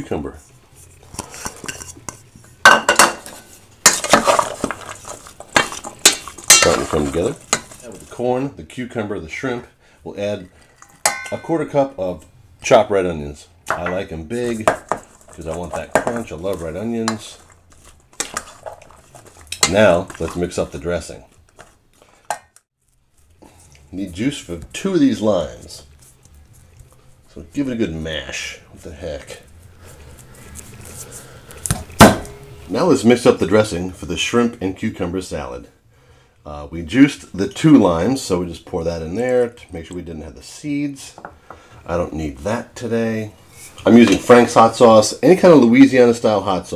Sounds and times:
Speech: 0.0s - 0.5s, 6.6s - 10.5s, 11.3s - 14.8s, 15.4s - 17.4s, 19.6s - 21.3s, 23.9s - 25.9s, 27.3s - 29.5s, 32.7s - 35.8s, 36.4s - 41.2s, 41.8s - 46.7s
Inside, small room: 0.0s - 46.7s.

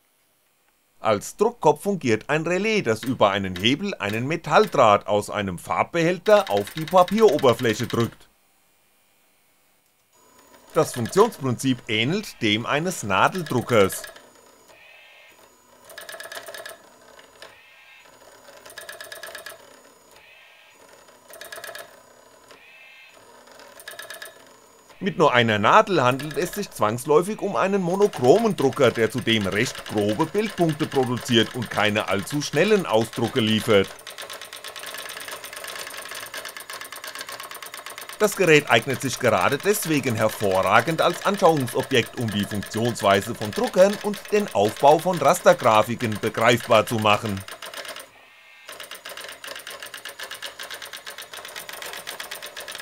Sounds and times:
Speech: 1.0s - 8.3s, 10.8s - 14.1s, 25.0s - 34.0s, 38.2s - 47.5s
Sewing machine: 2.9s - 5.0s, 6.3s - 8.2s, 10.2s - 14.8s, 15.4s - 22.6s, 23.2s - 52.8s.

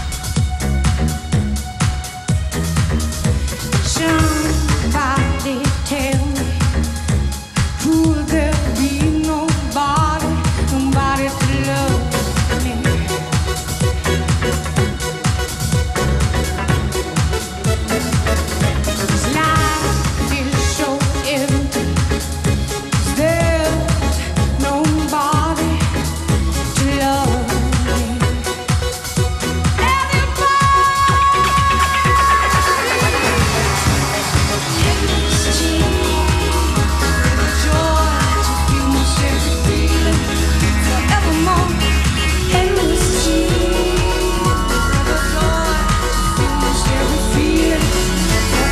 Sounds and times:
Electronic music: 0.0s - 48.7s
Singing: 29.8s - 48.7s.

